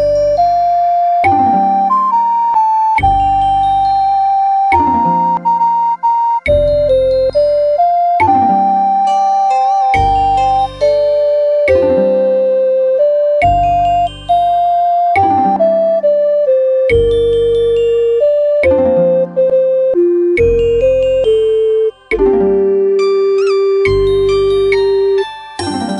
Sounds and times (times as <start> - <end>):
Tender music: 0.0 - 25.9.